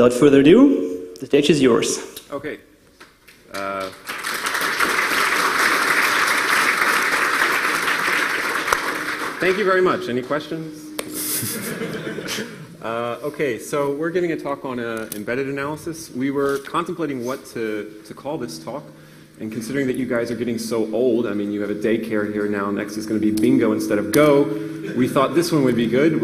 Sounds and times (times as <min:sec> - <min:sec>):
Speech: 0:00.0 - 0:02.6, 0:03.5 - 0:03.9, 0:09.4 - 0:11.0, 0:12.8 - 0:26.2.